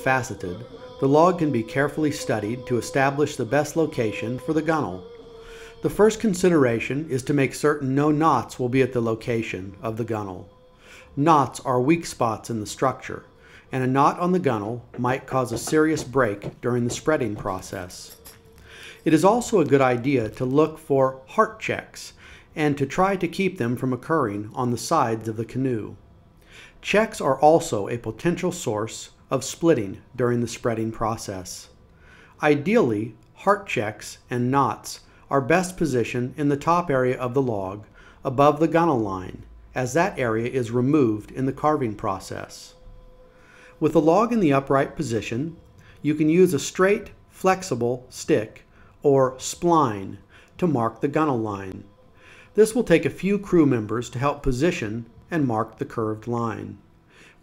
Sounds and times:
Speech: 0:00.0 - 0:10.6, 0:11.2 - 0:18.3, 0:19.0 - 0:26.0, 0:26.8 - 0:31.8, 0:32.4 - 0:42.8, 0:43.8 - 0:51.9, 0:52.6 - 0:56.8.

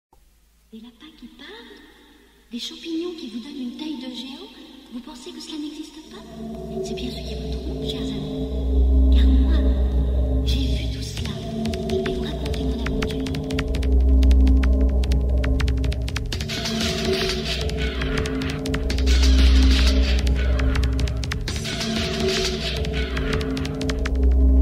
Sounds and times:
Speech: 0:00.7 - 0:01.9, 0:02.5 - 0:08.5, 0:09.1 - 0:09.9, 0:10.5 - 0:13.4
Music: 0:02.0 - 0:24.6.

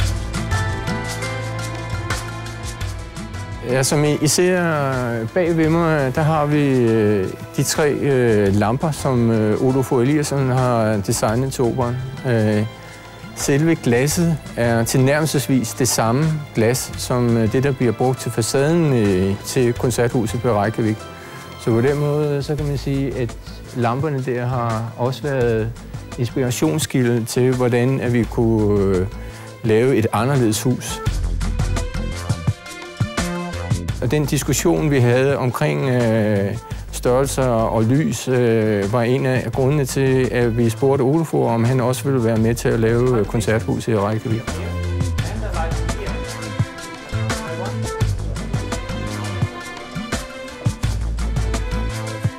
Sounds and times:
Music: 0:00.0 - 0:52.3
Speech: 0:03.6 - 0:12.7, 0:13.4 - 0:21.0, 0:21.6 - 0:31.1, 0:34.0 - 0:46.4, 0:47.2 - 0:48.4.

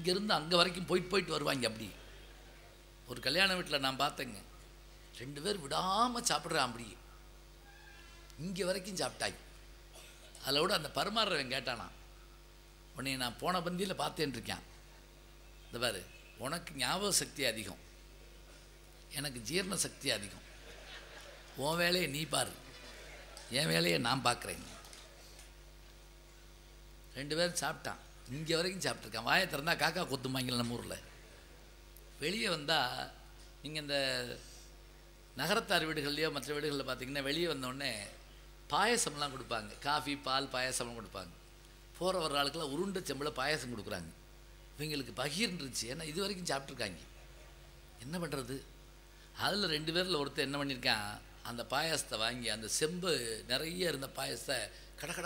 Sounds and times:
Male speech, man speaking: 0:00.0 - 0:02.0, 0:03.1 - 0:04.5, 0:05.2 - 0:07.0, 0:08.4 - 0:09.4, 0:10.4 - 0:12.0, 0:13.0 - 0:14.7, 0:15.7 - 0:17.8, 0:19.1 - 0:20.4, 0:21.6 - 0:22.6, 0:23.4 - 0:24.8, 0:27.2 - 0:31.1, 0:32.2 - 0:34.4, 0:35.4 - 0:41.3, 0:42.0 - 0:44.2, 0:44.8 - 0:47.1, 0:48.0 - 0:48.7, 0:49.4 - 0:55.2
Narration, monologue: 0:00.0 - 0:55.2.

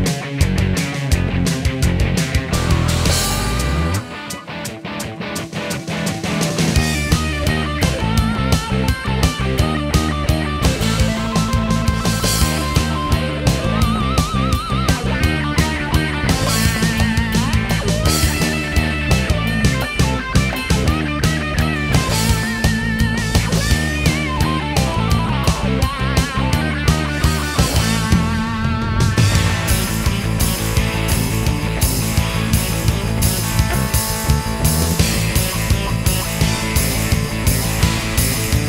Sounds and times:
Rhythm and blues: 0:00.0 - 0:38.6
Theme music: 0:02.4 - 0:38.6.

